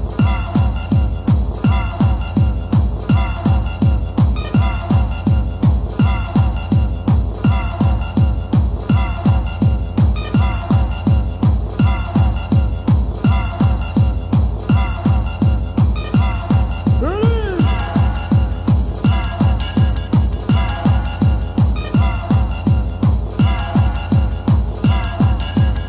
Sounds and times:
Techno: 0.0s - 25.8s.

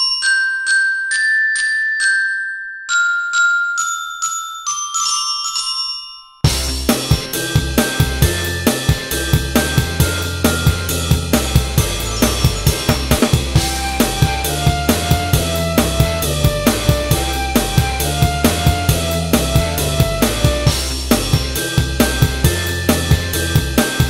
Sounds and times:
Marimba, xylophone: 0.0s - 16.3s
Drum kit: 6.5s - 24.0s.

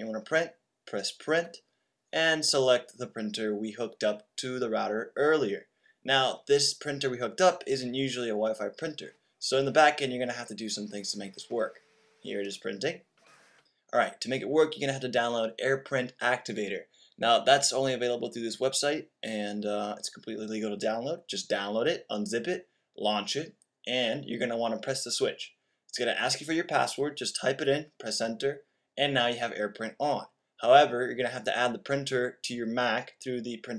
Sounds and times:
Speech: 0.0s - 13.1s, 13.9s - 33.7s.

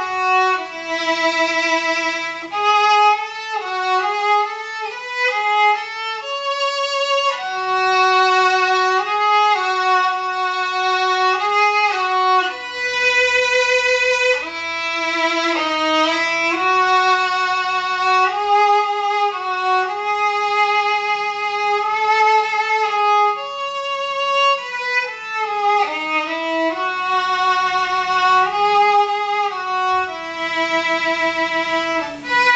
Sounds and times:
Violin, fiddle: 0.0s - 32.5s.

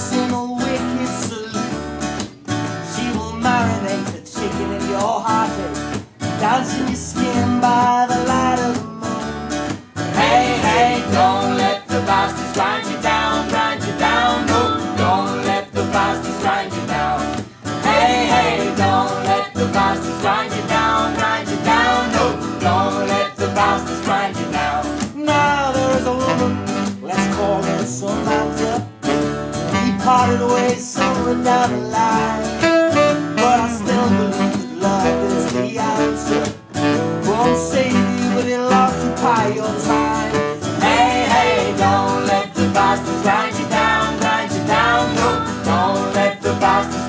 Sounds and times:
Music: 0.0s - 47.0s.

